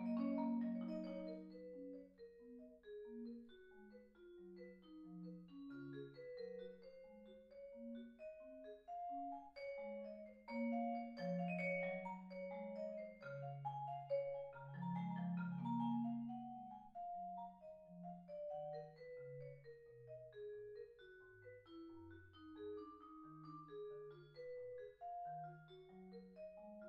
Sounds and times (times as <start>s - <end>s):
Percussion: 0.0s - 26.8s.